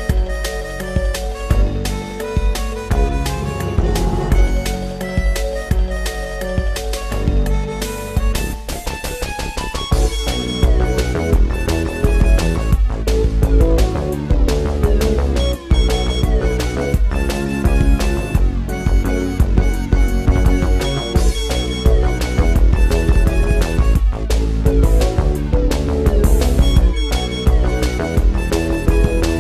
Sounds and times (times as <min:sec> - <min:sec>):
Soundtrack music: 0:02.6 - 0:05.7.